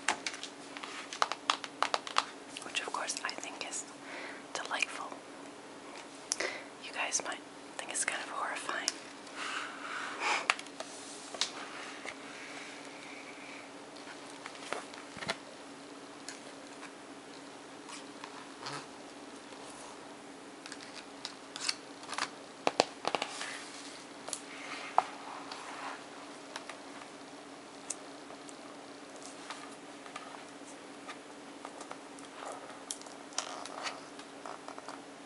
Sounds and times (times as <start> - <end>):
Crumpling, crinkling: 0.1 - 3.4, 20.6 - 26.8, 31.7 - 35.0.